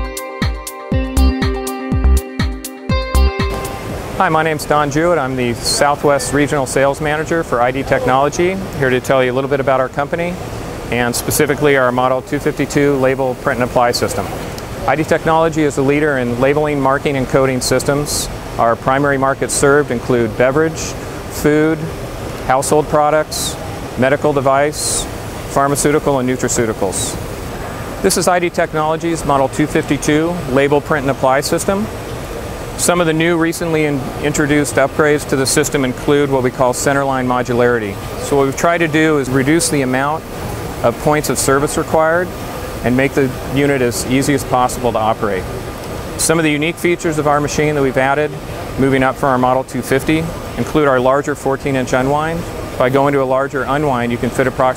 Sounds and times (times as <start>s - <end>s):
Speech: 4.2s - 27.2s, 28.0s - 31.9s, 32.8s - 45.5s, 46.2s - 54.7s.